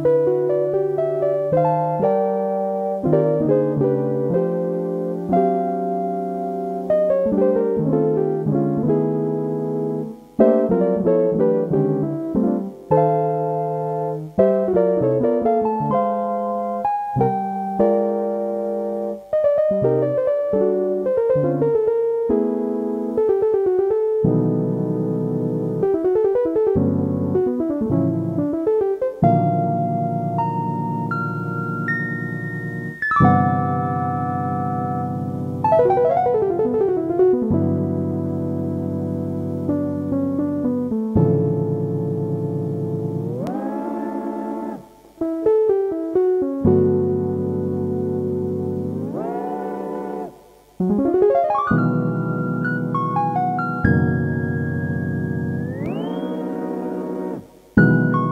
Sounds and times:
Piano: 0:00.0 - 0:58.3.

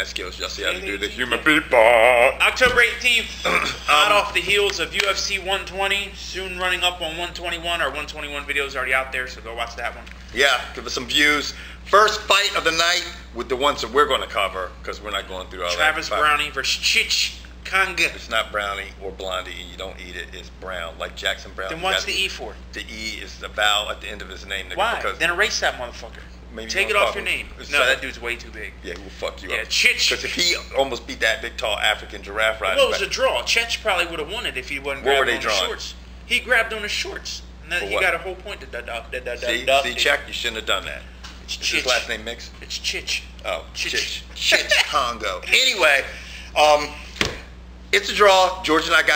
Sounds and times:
Speech: 0:00.0 - 0:47.0, 0:48.0 - 0:49.1.

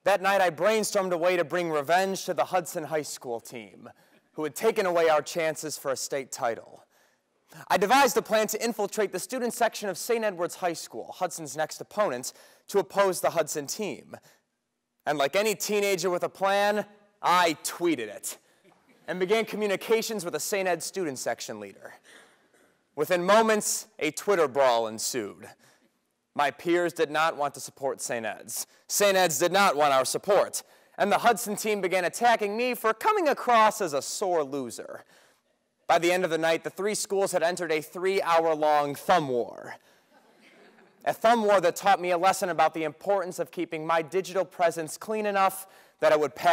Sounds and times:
Male speech, man speaking: 0:00.0 - 0:06.8, 0:07.6 - 0:14.2, 0:15.1 - 0:18.4, 0:19.1 - 0:22.0, 0:23.0 - 0:25.6, 0:26.4 - 0:35.0, 0:35.9 - 0:39.8, 0:41.0 - 0:46.5.

